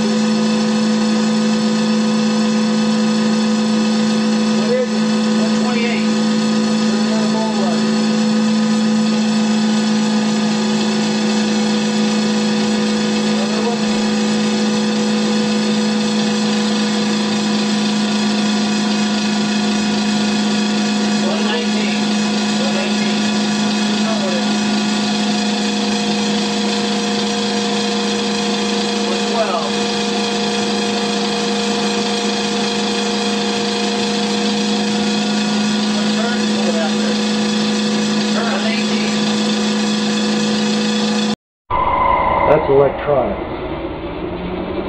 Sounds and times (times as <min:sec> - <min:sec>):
Medium engine (mid frequency): 0:00.0 - 0:41.4, 0:42.5 - 0:44.8
Heavy engine (low frequency): 0:00.0 - 0:44.8
Speech: 0:04.6 - 0:06.2, 0:06.8 - 0:07.9, 0:13.3 - 0:14.0, 0:21.2 - 0:23.3, 0:24.0 - 0:24.5, 0:29.1 - 0:29.8, 0:35.9 - 0:37.2, 0:38.3 - 0:39.3, 0:42.5 - 0:43.4.